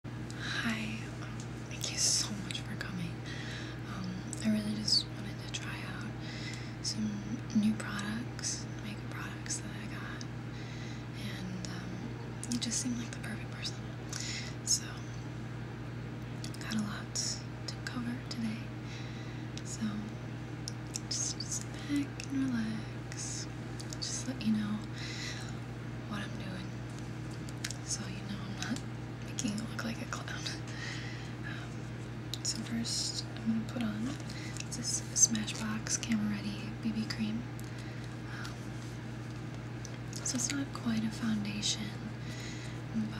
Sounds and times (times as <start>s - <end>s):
Inside, small room: 0.0s - 43.1s
Speech: 3.9s - 6.1s, 6.8s - 10.2s, 11.2s - 13.8s, 27.8s - 30.6s, 32.4s - 37.5s, 40.2s - 42.1s.